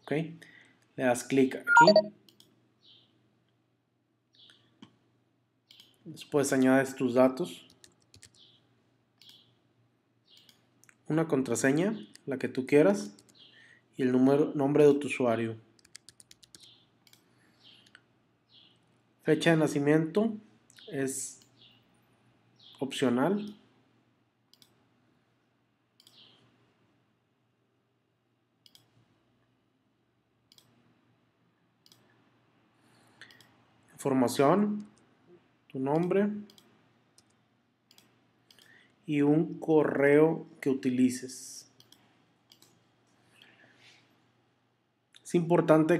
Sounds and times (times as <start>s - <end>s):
Speech: 0.0s - 0.4s, 1.0s - 2.0s, 6.1s - 7.7s, 11.1s - 13.2s, 14.0s - 15.7s, 19.2s - 21.4s, 22.8s - 23.6s, 34.0s - 34.9s, 35.7s - 36.5s, 39.1s - 41.8s, 45.2s - 46.0s.